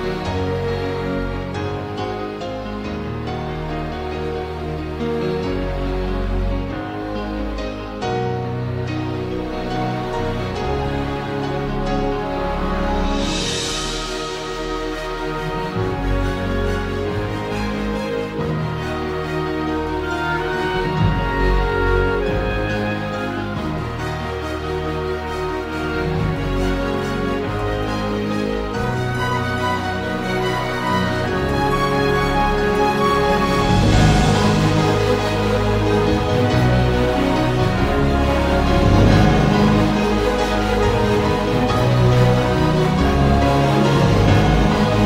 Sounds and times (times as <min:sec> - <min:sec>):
Theme music: 0:00.0 - 0:45.0.